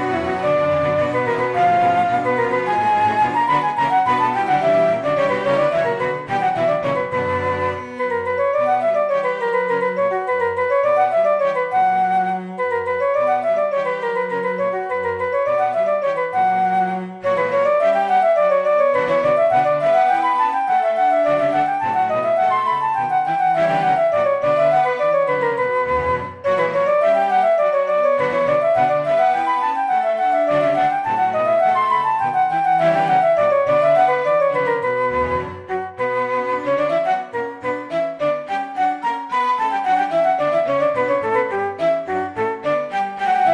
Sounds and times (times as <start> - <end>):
Flute: 0.0 - 43.5.